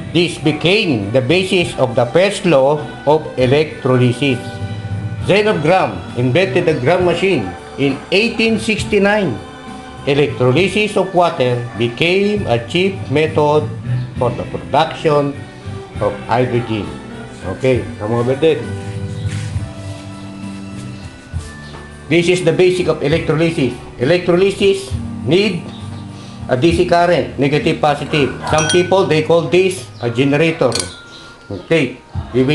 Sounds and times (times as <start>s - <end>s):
Music: 0.0s - 32.5s
Speech: 0.2s - 4.4s, 5.3s - 9.4s, 10.1s - 15.4s, 16.0s - 18.7s, 22.1s - 25.6s, 26.5s - 30.9s, 31.5s - 32.5s.